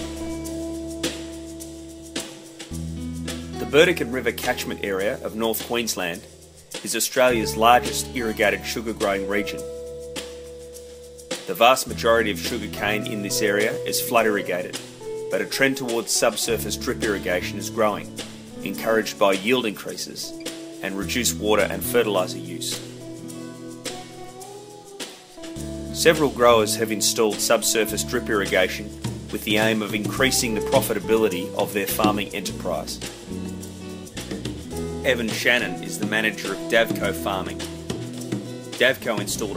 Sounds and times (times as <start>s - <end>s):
Music: 0.0s - 39.5s
Speech: 3.6s - 9.7s, 11.5s - 22.8s, 25.9s - 33.1s, 35.0s - 37.6s, 38.8s - 39.5s.